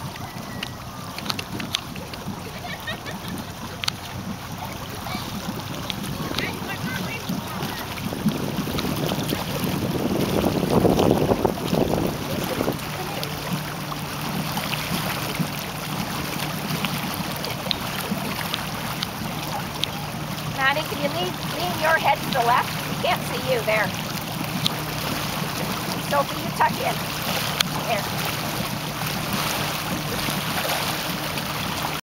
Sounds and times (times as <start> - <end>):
Speech: 20.6 - 23.9, 26.1 - 27.0, 27.8 - 28.1.